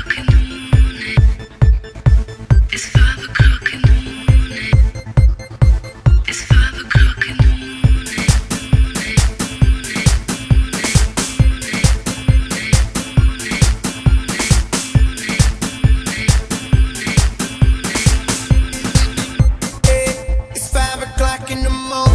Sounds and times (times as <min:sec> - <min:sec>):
Techno: 0:00.0 - 0:22.1.